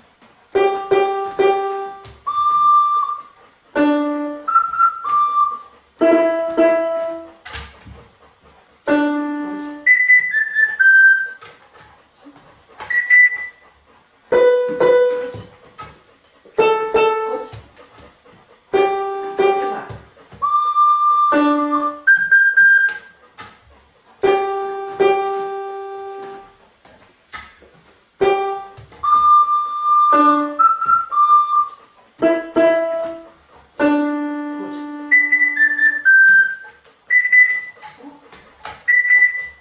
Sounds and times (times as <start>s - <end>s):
Dog: 0.2s - 39.6s.